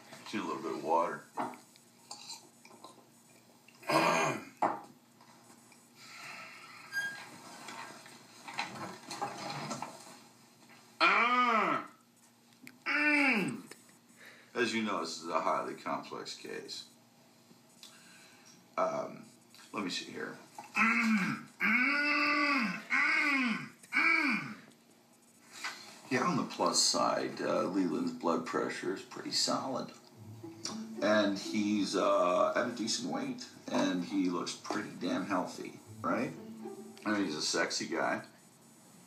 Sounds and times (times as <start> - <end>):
Speech: 0.3 - 1.3, 14.6 - 16.9, 18.8 - 20.4, 26.1 - 30.0, 30.7 - 36.4, 37.0 - 38.4
Throat clearing: 3.8 - 4.6, 20.8 - 24.6.